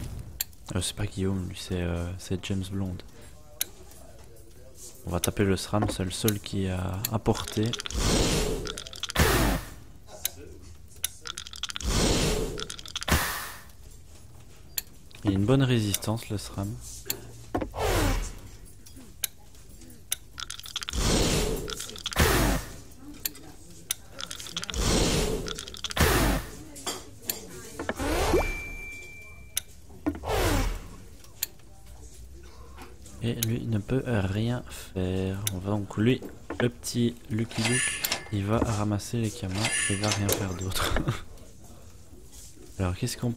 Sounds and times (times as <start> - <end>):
Speech: 15.2 - 17.3.